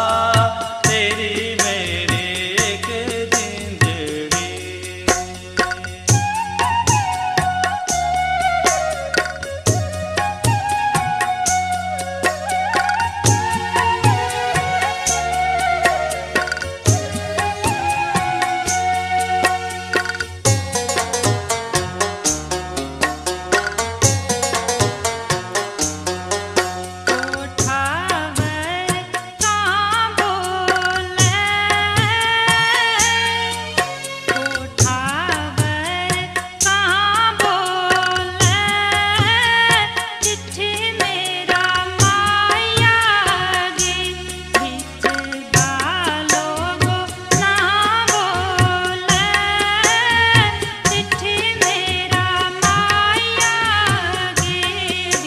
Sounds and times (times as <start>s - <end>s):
Folk music: 0.0s - 55.2s.